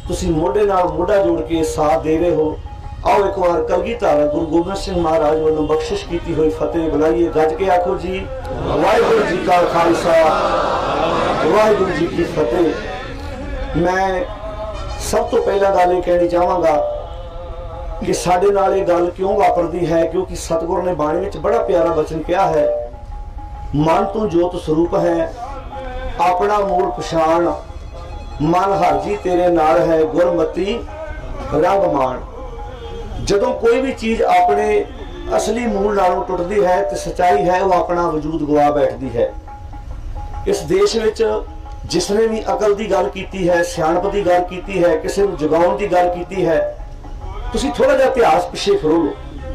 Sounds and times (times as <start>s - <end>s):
Male speech, man speaking: 0.0s - 13.1s, 13.8s - 17.0s, 18.0s - 22.9s, 23.8s - 25.6s, 26.2s - 27.6s, 28.4s - 32.3s, 33.2s - 39.4s, 40.5s - 46.8s, 47.4s - 49.2s
Narration, monologue: 0.0s - 49.5s.